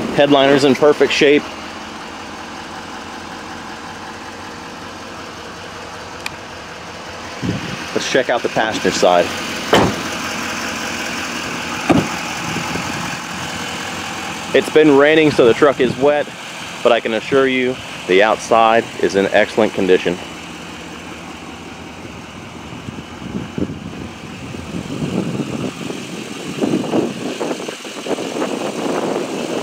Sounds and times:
Speech: 0.0s - 1.5s, 7.9s - 9.3s, 14.5s - 20.3s
Truck: 0.0s - 29.6s.

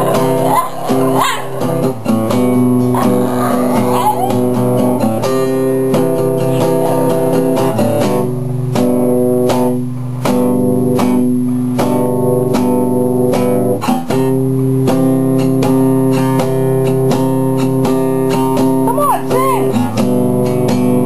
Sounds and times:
Yip: 0.0s - 1.8s, 2.9s - 4.4s
Bow-wow: 0.0s - 2.0s, 2.8s - 4.6s
Music: 0.0s - 21.0s
Whimper (dog): 3.0s - 4.4s.

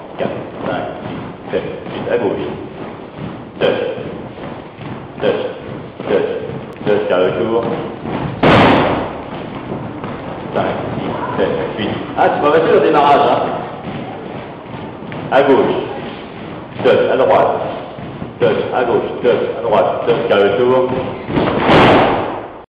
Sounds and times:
Speech: 0.2s - 2.6s, 3.6s - 4.1s, 5.2s - 7.8s, 10.5s - 13.7s, 15.3s - 16.1s, 16.8s - 21.2s.

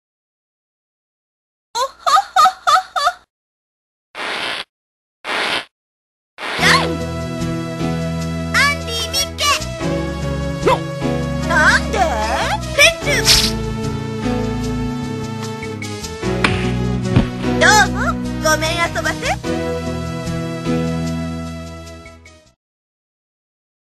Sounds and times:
Music: 6.6s - 22.6s
Speech: 8.6s - 9.6s, 11.5s - 13.4s, 17.6s - 19.4s.

